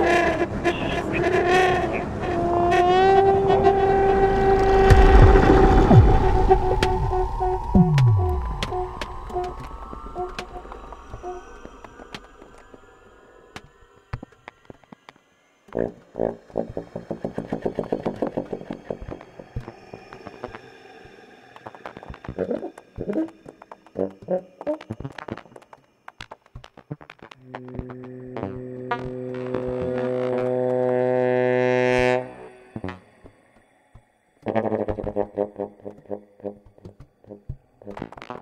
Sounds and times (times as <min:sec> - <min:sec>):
Music: 0:04.0 - 0:38.4.